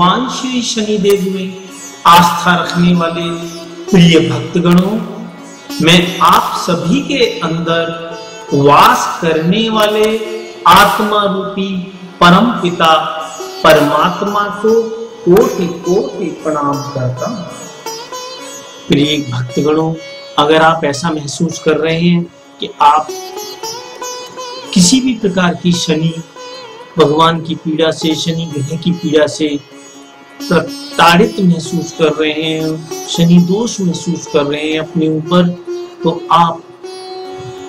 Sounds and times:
Speech: 0.0 - 5.2, 5.8 - 17.6, 18.9 - 23.2, 24.7 - 26.3, 27.0 - 29.7, 30.5 - 36.6.

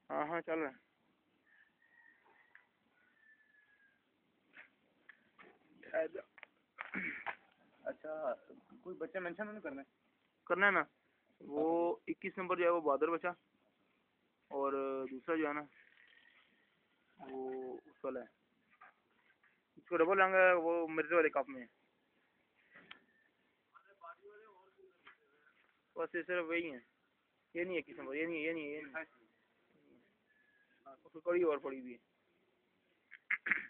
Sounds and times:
Speech: 0.1 - 0.8, 17.2 - 18.4, 19.8 - 21.8, 27.6 - 29.2, 30.8 - 32.0.

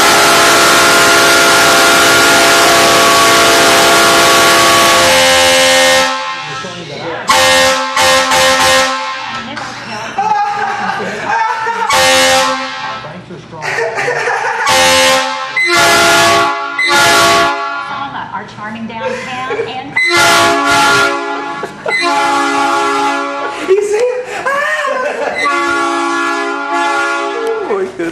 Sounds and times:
Train horn: 0.0 - 6.7, 7.3 - 9.4, 11.9 - 13.1, 14.6 - 18.1, 20.0 - 23.6, 25.4 - 27.7
Vehicle horn, car horn, honking: 0.0 - 9.5, 11.9 - 13.2, 14.6 - 18.2, 20.0 - 23.6, 25.4 - 27.7.

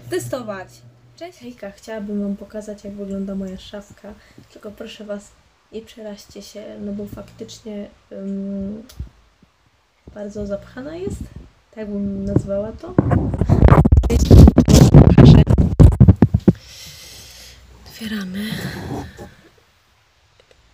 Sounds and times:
Speech: 0.0 - 9.1, 10.1 - 13.1, 15.1 - 15.6, 17.9 - 19.3.

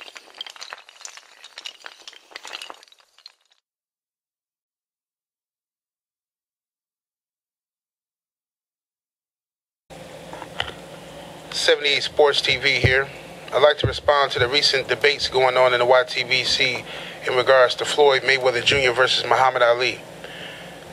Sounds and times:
Speech: 11.5 - 20.0.

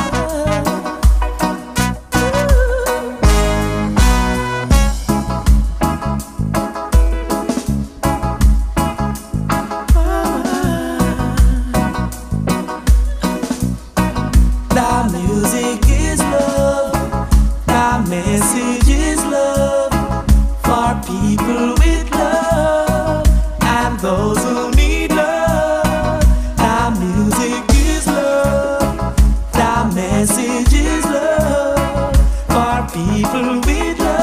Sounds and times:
Soul music: 0.0 - 34.2.

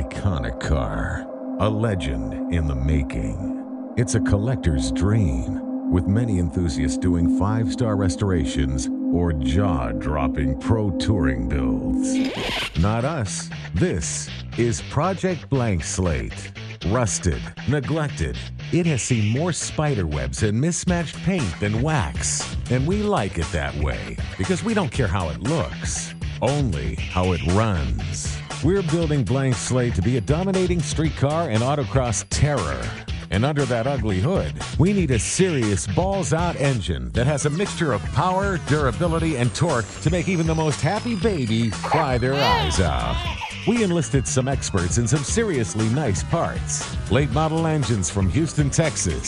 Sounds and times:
Music: 0.0 - 49.2
Speech: 0.0 - 49.2.

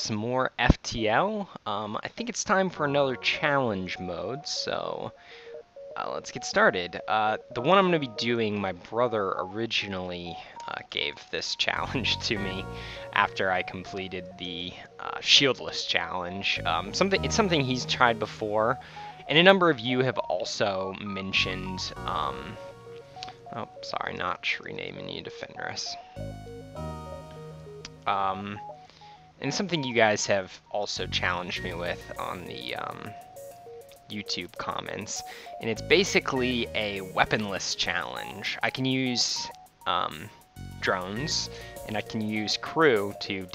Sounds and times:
Speech: 0.0 - 5.2, 6.0 - 22.6, 23.5 - 26.0, 28.1 - 28.6, 29.4 - 33.2, 34.1 - 43.5
Music: 2.5 - 43.5.

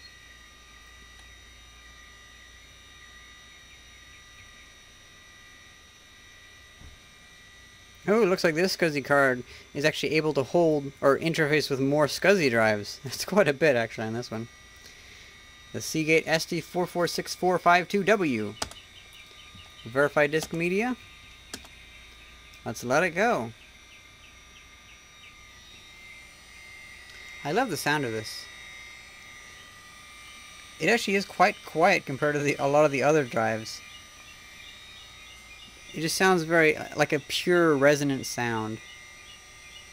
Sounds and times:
Speech: 8.1 - 14.5, 15.8 - 18.6, 19.9 - 21.0, 22.6 - 23.5, 27.4 - 28.5, 30.8 - 33.8, 35.9 - 38.8.

